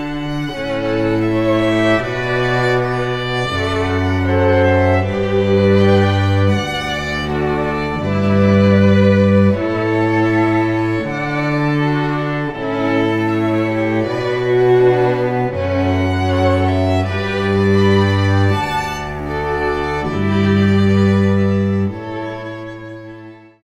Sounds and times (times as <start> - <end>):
Music: 0.0 - 23.6.